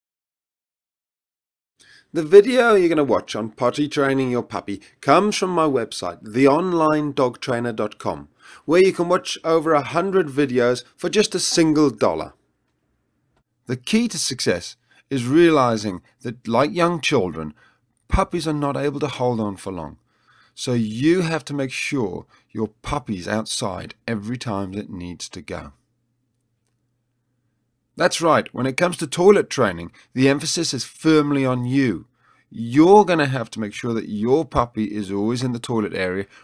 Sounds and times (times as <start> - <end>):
Speech: 2.1 - 12.4, 13.7 - 20.0, 20.6 - 25.8, 28.0 - 36.3.